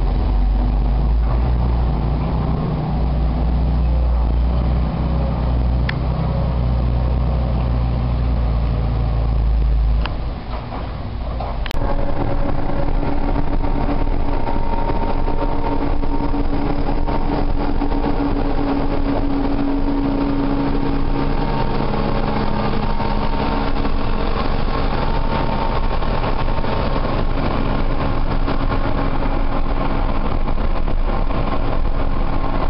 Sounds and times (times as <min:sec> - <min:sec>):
Truck: 0:00.0 - 0:32.6.